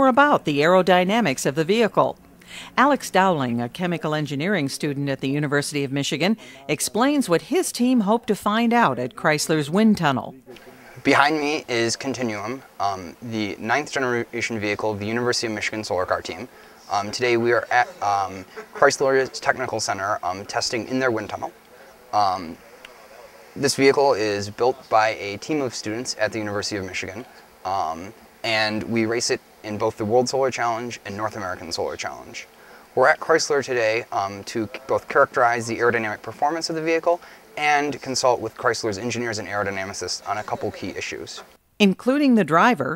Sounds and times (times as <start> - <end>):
Speech: 2.8 - 42.9.